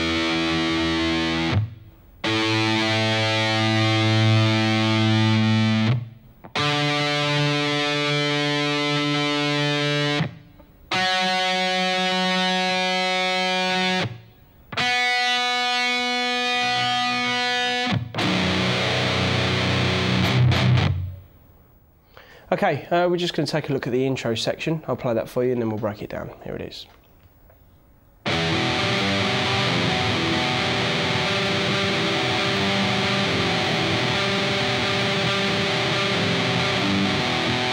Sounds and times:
Speech: 22.5s - 27.0s.

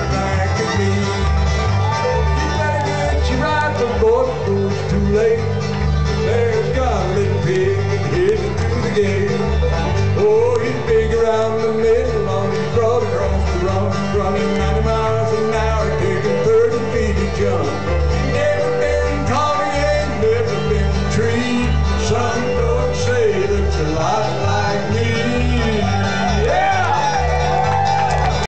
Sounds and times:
Male singing: 0.0s - 1.4s, 2.2s - 27.3s
Music: 0.0s - 28.4s.

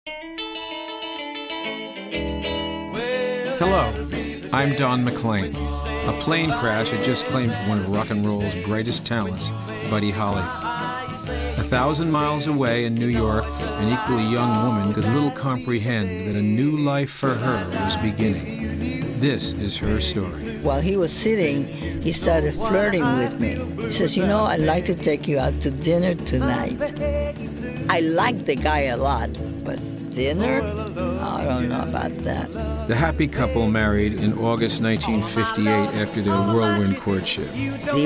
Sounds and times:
Guitar: 0.1s - 38.0s
Speech: 3.6s - 4.0s, 4.6s - 10.5s, 11.6s - 18.6s, 19.2s - 26.8s, 27.9s - 29.3s, 30.2s - 30.6s, 31.2s - 38.0s.

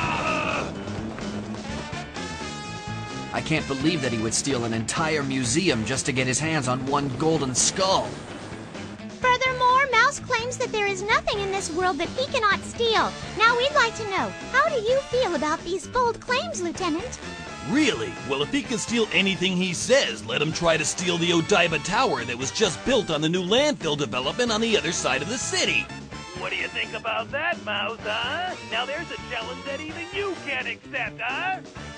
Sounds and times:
Music: 0.0s - 31.9s
Speech: 3.4s - 8.1s, 26.4s - 31.6s.

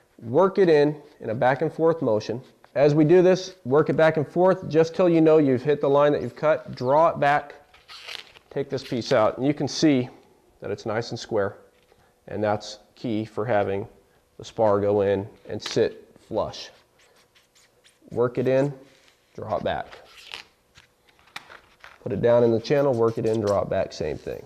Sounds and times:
Inside, small room: 0.0s - 24.4s
Speech: 0.2s - 7.6s, 8.5s - 11.6s, 12.3s - 16.8s, 18.1s - 18.8s, 19.4s - 20.0s, 22.0s - 24.4s.

